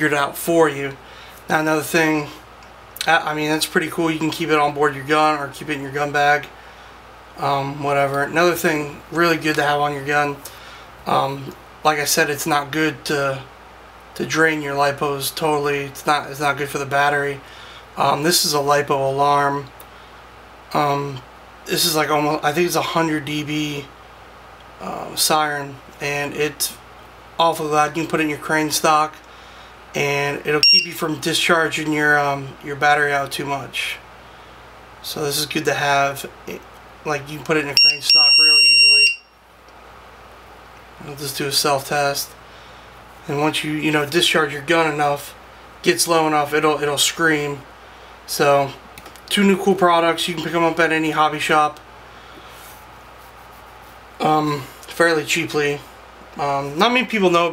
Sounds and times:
Speech: 0:00.0 - 0:02.4, 0:03.0 - 0:06.5, 0:07.4 - 0:13.5, 0:14.2 - 0:17.4, 0:18.0 - 0:19.8, 0:20.7 - 0:24.0, 0:24.8 - 0:26.8, 0:27.4 - 0:29.2, 0:30.0 - 0:34.1, 0:35.0 - 0:38.6, 0:41.0 - 0:42.4, 0:43.2 - 0:47.7, 0:48.3 - 0:51.8, 0:54.2 - 0:57.5.

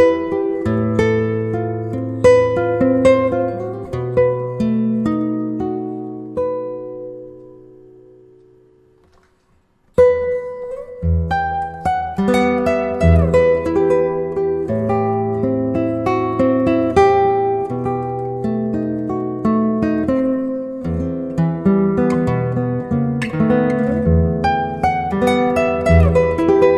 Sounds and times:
Acoustic guitar: 0:00.0 - 0:26.7.

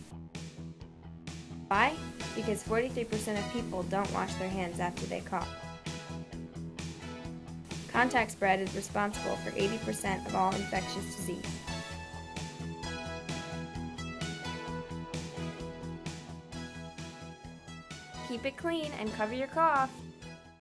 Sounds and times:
Music: 0:00.0 - 0:20.6
Speech: 0:01.7 - 0:05.5, 0:07.9 - 0:11.5, 0:18.3 - 0:20.0.

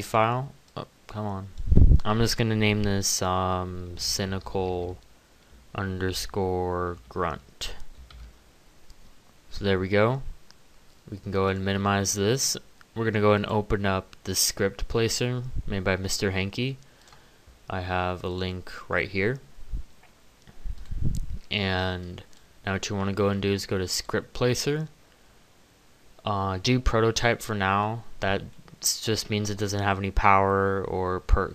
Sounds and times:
Speech: 0:00.0 - 0:05.0, 0:05.7 - 0:07.8, 0:09.5 - 0:10.3, 0:11.1 - 0:16.8, 0:17.7 - 0:19.5, 0:21.5 - 0:25.0, 0:26.2 - 0:31.5.

